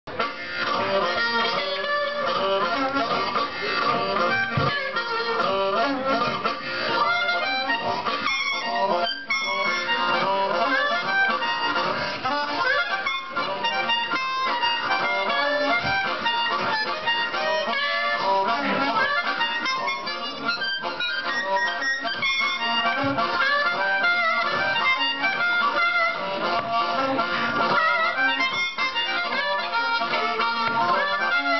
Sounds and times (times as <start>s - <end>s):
Harmonica: 0.1s - 31.5s
Wind instrument, woodwind instrument: 0.1s - 31.5s.